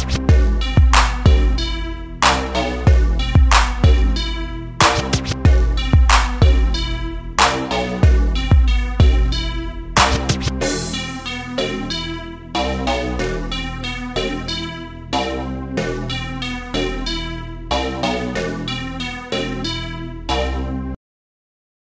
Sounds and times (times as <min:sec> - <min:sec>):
Sampler: 0:00.0 - 0:12.2
Hip hop music: 0:00.0 - 0:20.9.